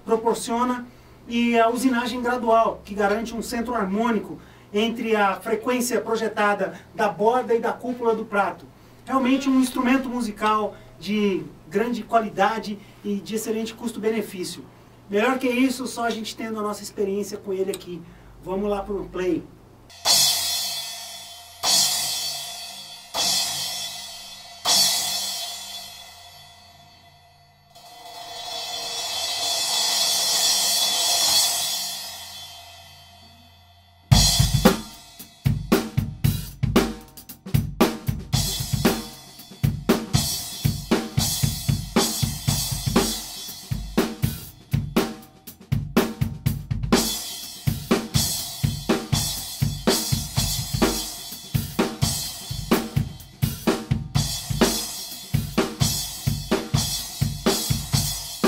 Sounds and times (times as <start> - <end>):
Speech: 0.0 - 19.5
Music: 19.9 - 58.4.